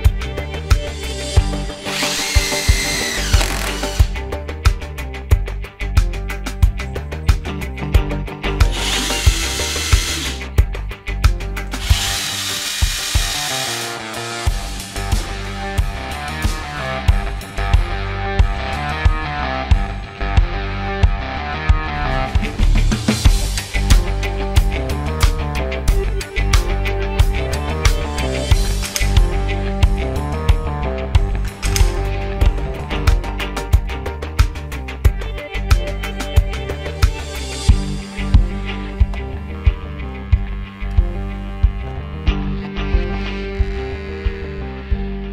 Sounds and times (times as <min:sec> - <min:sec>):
Music: 0:00.0 - 0:45.3
Drill: 0:01.8 - 0:04.2, 0:08.7 - 0:10.4, 0:11.8 - 0:14.5.